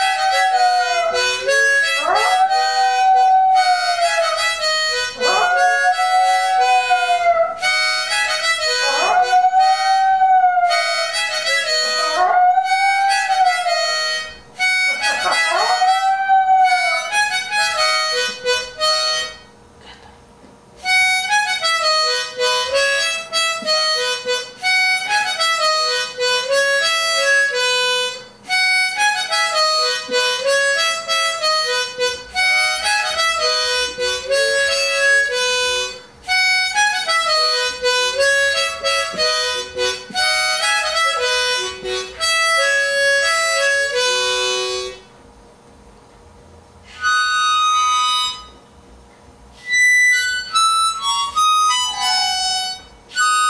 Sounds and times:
Music: 0.0 - 19.6, 20.8 - 45.2, 46.8 - 48.7, 49.6 - 53.4.

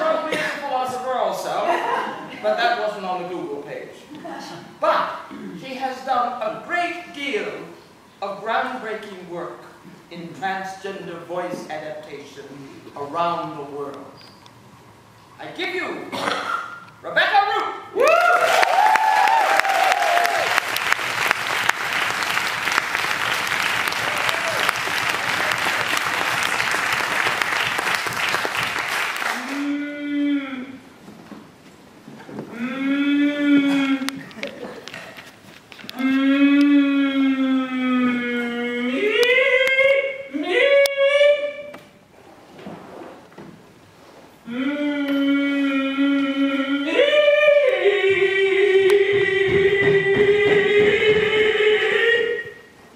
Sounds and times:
Narration, monologue: 0.0 - 18.0.

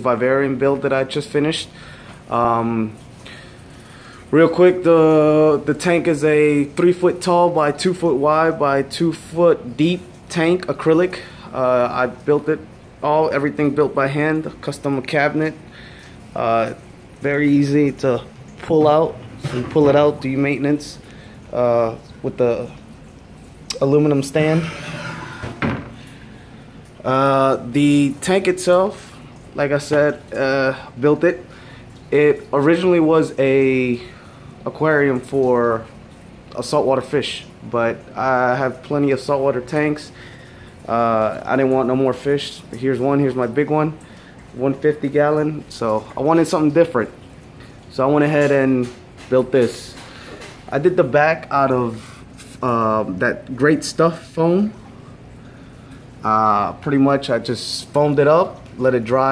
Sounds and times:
Speech: 0.0 - 1.7, 2.3 - 3.0, 4.3 - 15.6, 16.4 - 22.8, 23.7 - 24.8, 27.0 - 31.5, 32.1 - 35.9, 36.5 - 40.2, 40.9 - 44.0, 44.6 - 47.2, 47.9 - 50.0, 50.7 - 52.0, 52.6 - 54.8, 56.2 - 59.3.

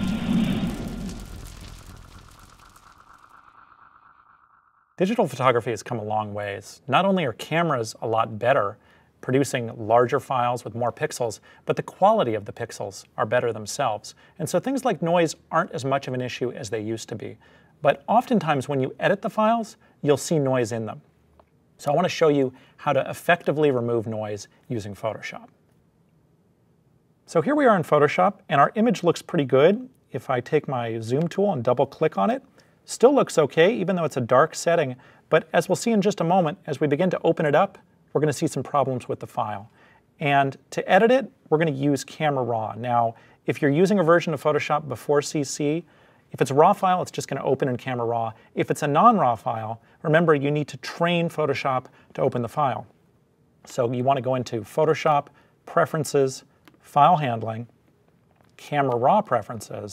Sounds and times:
Speech: 5.0 - 21.1, 21.8 - 25.6, 27.3 - 52.9, 53.7 - 57.8, 58.6 - 59.9.

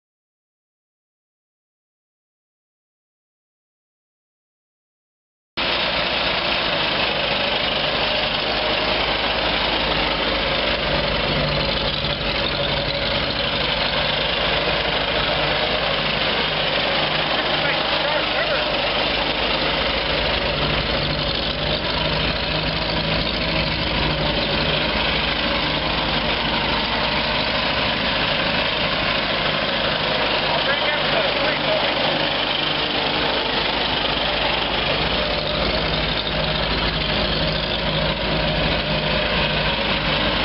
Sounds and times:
Outside, rural or natural: 5.6 - 40.4
Vehicle: 5.6 - 40.4
Vibration: 5.6 - 40.4.

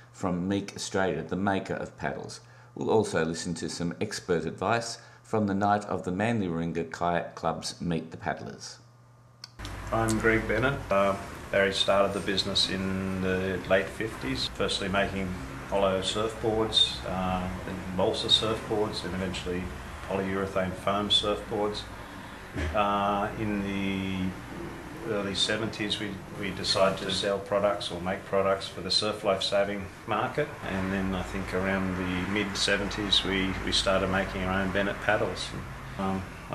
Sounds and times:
Speech: 0.2 - 8.9, 9.9 - 21.9, 22.6 - 24.4, 25.0 - 36.5.

